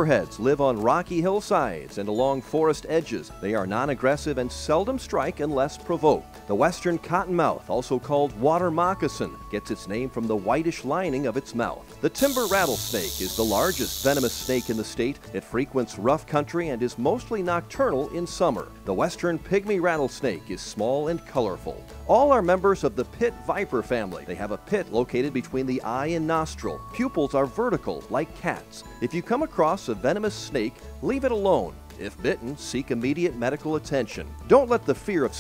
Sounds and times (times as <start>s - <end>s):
Snake: 12.2s - 14.9s.